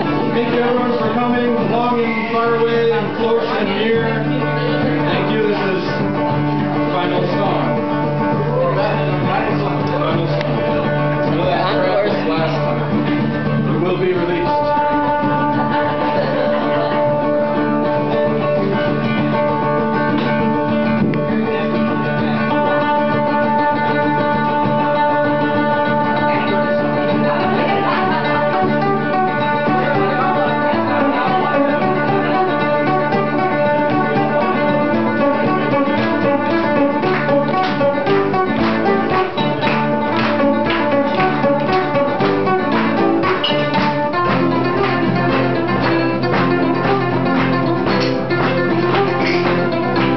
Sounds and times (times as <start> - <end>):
Music: 0.0 - 50.1.